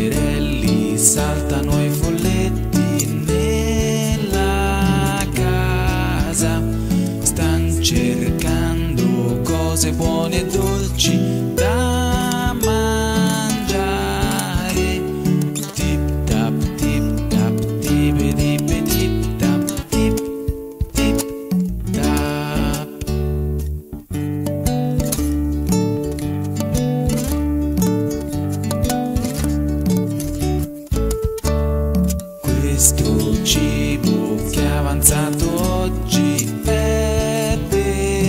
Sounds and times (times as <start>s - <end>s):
Christian music: 0.0s - 23.9s, 25.2s - 38.2s
Christmas music: 0.0s - 38.2s.